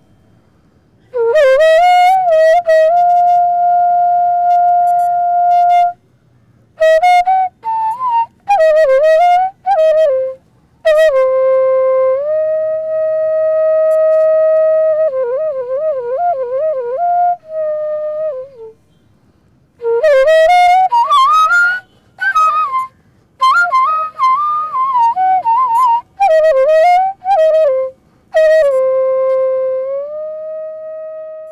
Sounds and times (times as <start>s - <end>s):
Music: 1.1s - 6.0s, 19.8s - 31.5s.